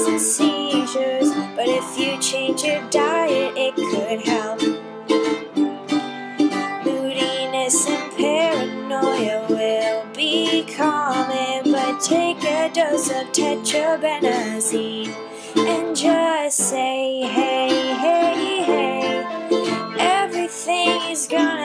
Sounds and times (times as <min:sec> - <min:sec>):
Ukulele: 0:00.0 - 0:21.6.